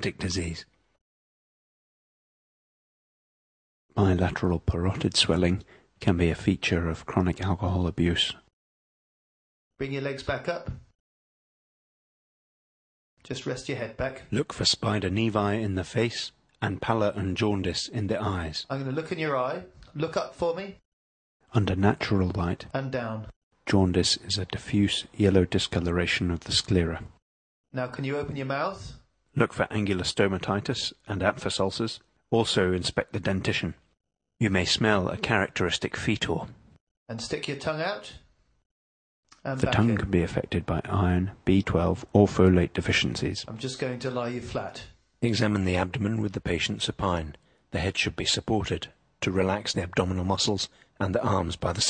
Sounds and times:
Conversation: 9.8s - 10.8s, 13.3s - 20.9s, 21.5s - 27.0s, 27.7s - 36.3s, 37.1s - 51.8s.

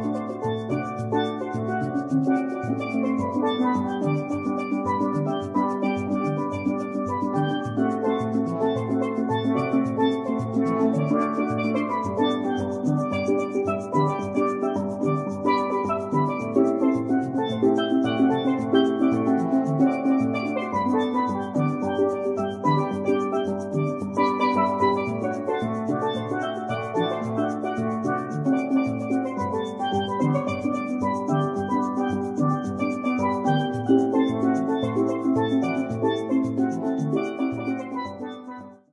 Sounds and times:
Musical instrument: 0.0s - 38.8s.

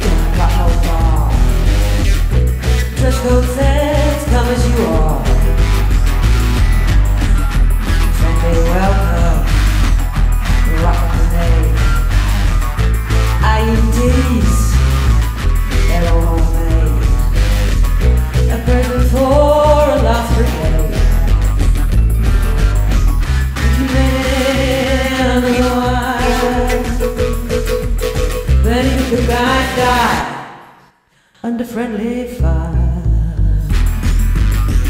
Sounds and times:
Music: 0.0s - 34.9s
Singing: 3.0s - 5.8s, 18.5s - 21.3s, 23.6s - 27.2s, 28.6s - 30.6s.

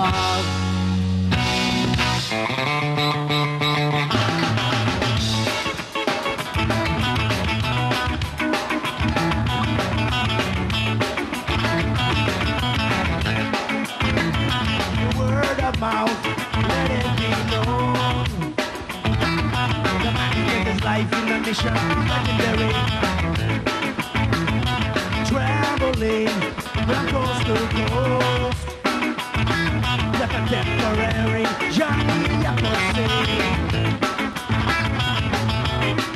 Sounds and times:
Rhythm and blues: 0.0s - 36.1s.

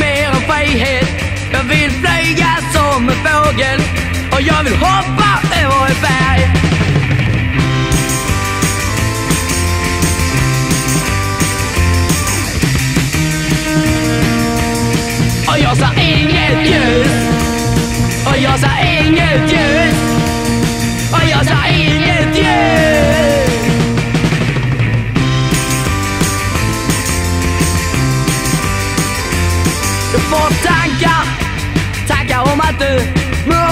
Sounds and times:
Music: 0.0s - 33.7s.

